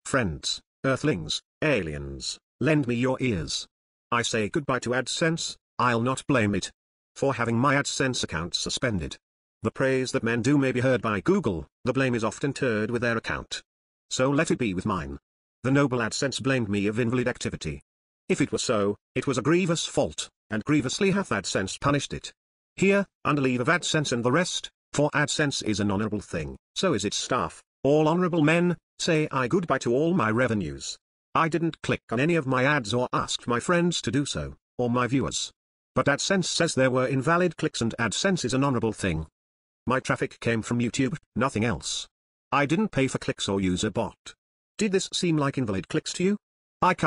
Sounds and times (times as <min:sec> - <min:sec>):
Speech synthesizer: 0:00.1 - 0:39.3, 0:39.9 - 0:47.0.